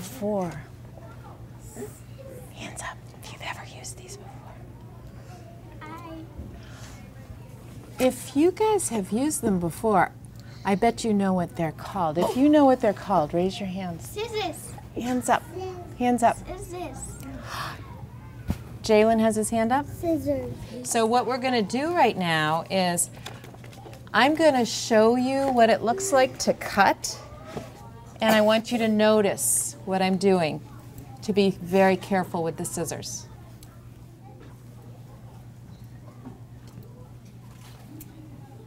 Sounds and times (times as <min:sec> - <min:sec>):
Child speech, kid speaking: 0:05.2 - 0:06.5, 0:14.0 - 0:18.5, 0:19.9 - 0:20.9, 0:25.9 - 0:26.4.